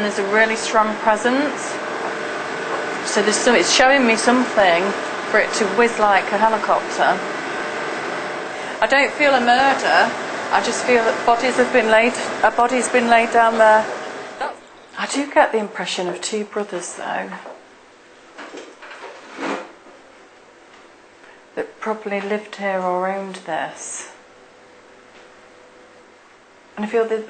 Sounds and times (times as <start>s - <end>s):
Speech: 0.0s - 1.8s, 3.0s - 7.3s, 8.8s - 17.5s, 21.6s - 24.2s, 26.8s - 27.3s.